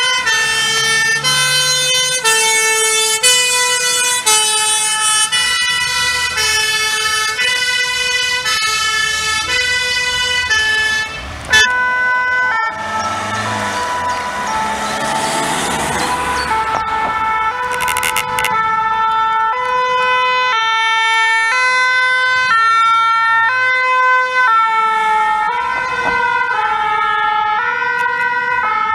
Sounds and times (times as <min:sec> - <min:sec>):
Fire engine, fire truck (siren): 0:00.0 - 0:28.9
Truck: 0:00.0 - 0:28.9.